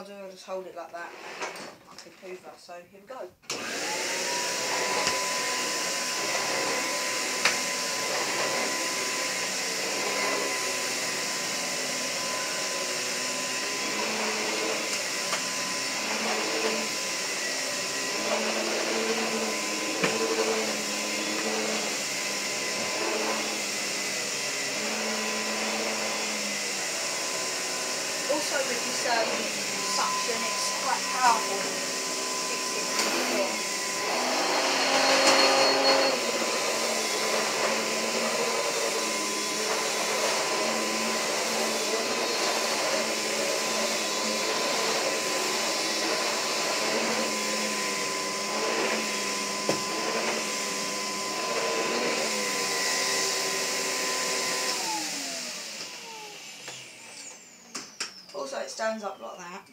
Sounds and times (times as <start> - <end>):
Vacuum cleaner: 0.0 - 2.4, 3.5 - 59.7.